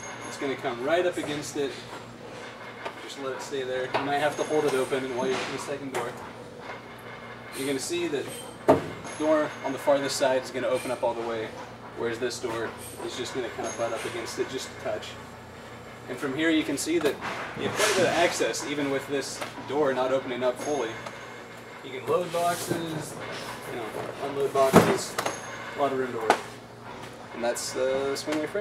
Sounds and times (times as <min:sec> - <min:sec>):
Speech: 0:00.3 - 0:01.8, 0:03.0 - 0:06.2, 0:07.6 - 0:08.3, 0:09.2 - 0:15.2, 0:16.1 - 0:21.0, 0:21.8 - 0:25.2, 0:25.8 - 0:26.5, 0:27.4 - 0:28.6.